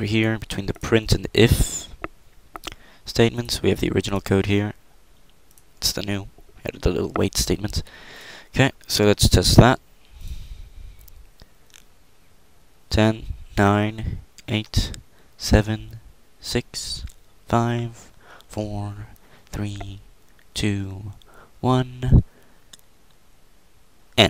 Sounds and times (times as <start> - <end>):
Speech: 0.0 - 2.0, 3.1 - 4.8, 5.8 - 7.9, 8.5 - 9.8, 12.9 - 20.0, 20.6 - 22.3.